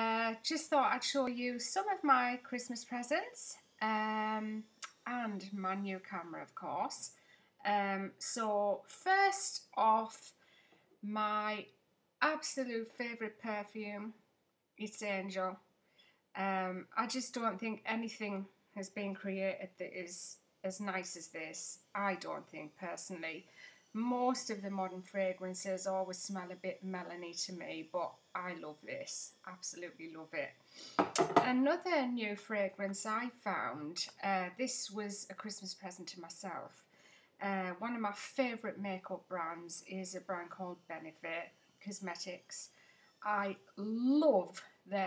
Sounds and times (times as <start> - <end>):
Speech: 0.0 - 10.4, 11.0 - 14.2, 14.8 - 15.6, 16.4 - 30.6, 31.2 - 36.8, 37.4 - 45.0.